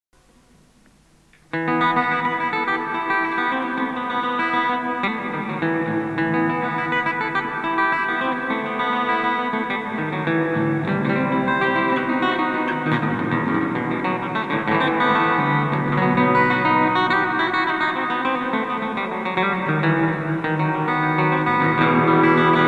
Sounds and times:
Effects unit: 0:00.2 - 0:22.6
Acoustic guitar: 0:01.3 - 0:22.6.

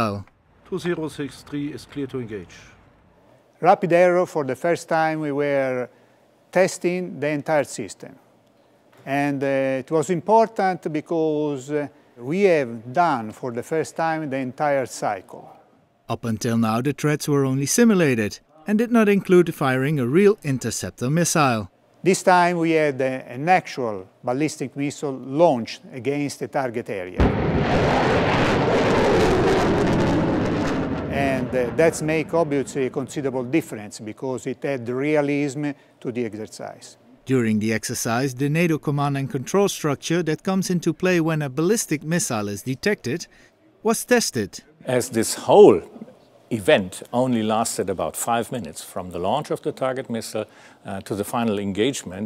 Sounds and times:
Speech: 0:09.0 - 0:27.2, 0:31.1 - 0:52.2.

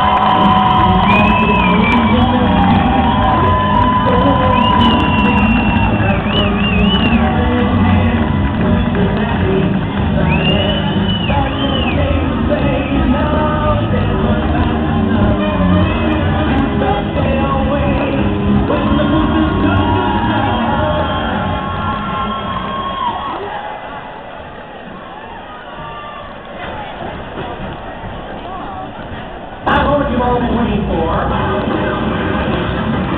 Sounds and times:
Music: 0:00.0 - 0:24.0, 0:26.6 - 0:33.1
Cheering: 0:00.0 - 0:30.4.

